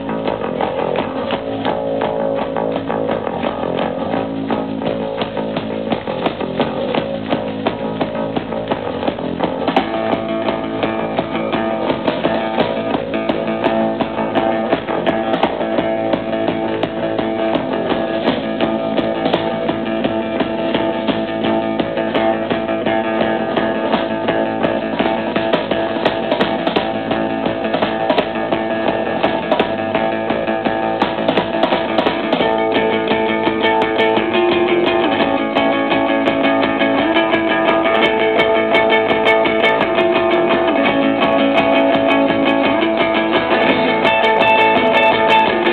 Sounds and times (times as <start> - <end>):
Music: 0.0 - 45.7.